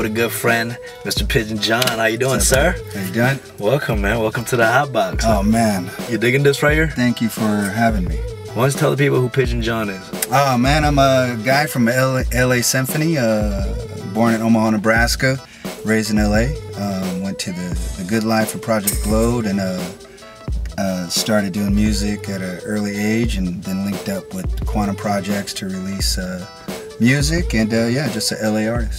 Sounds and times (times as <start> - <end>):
Speech: 0.0 - 20.0, 20.8 - 28.9
Music: 0.0 - 28.9.